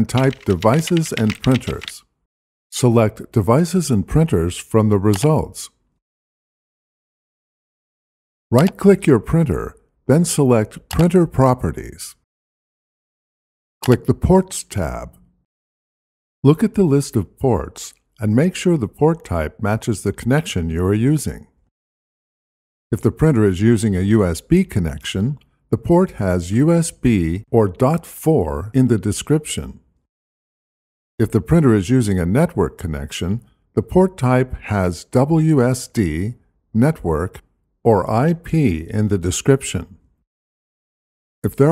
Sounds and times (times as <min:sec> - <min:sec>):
Speech: 0:00.0 - 0:02.1, 0:02.7 - 0:05.8, 0:08.5 - 0:12.2, 0:13.8 - 0:15.2, 0:16.4 - 0:21.6, 0:22.9 - 0:29.8, 0:31.2 - 0:40.0, 0:41.4 - 0:41.7.